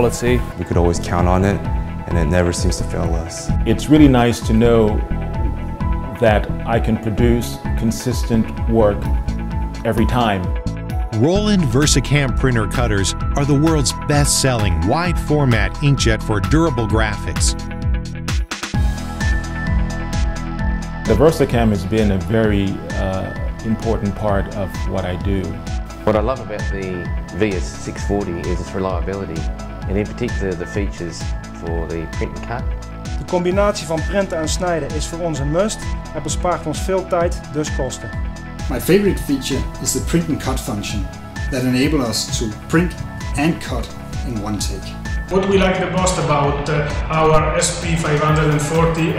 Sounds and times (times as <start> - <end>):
Speech: 0.0 - 5.0, 6.1 - 9.1, 9.8 - 10.5, 11.2 - 17.6, 21.1 - 32.6, 33.2 - 38.1, 38.7 - 49.1
Music: 0.0 - 49.1.